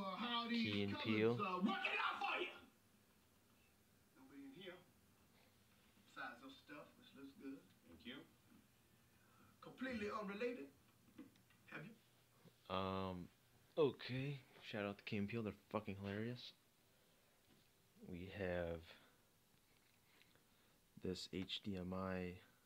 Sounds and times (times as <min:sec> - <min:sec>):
Speech: 0:00.1 - 0:02.7, 0:12.7 - 0:16.6, 0:18.0 - 0:19.1, 0:21.0 - 0:22.5.